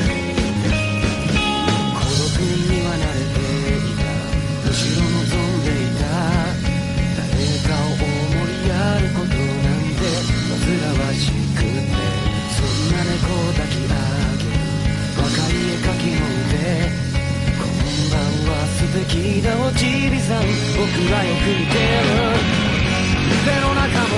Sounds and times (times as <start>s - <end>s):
Music: 0.0s - 24.1s.